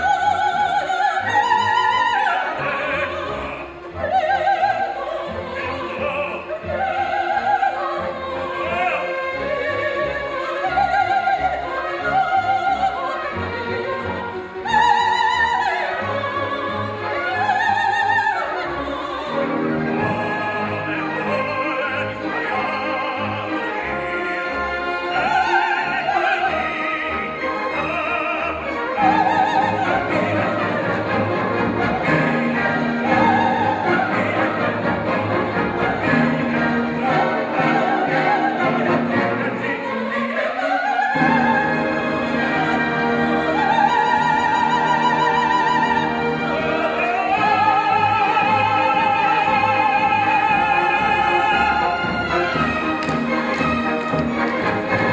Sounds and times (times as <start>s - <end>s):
Opera: 0.0s - 55.1s
Orchestra: 0.0s - 55.1s.